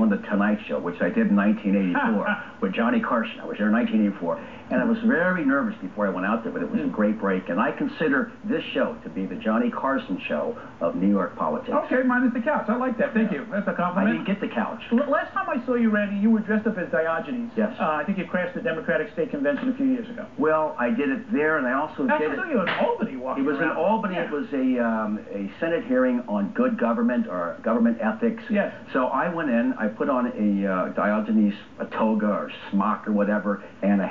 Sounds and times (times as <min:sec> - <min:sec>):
Speech: 0:00.0 - 0:34.1.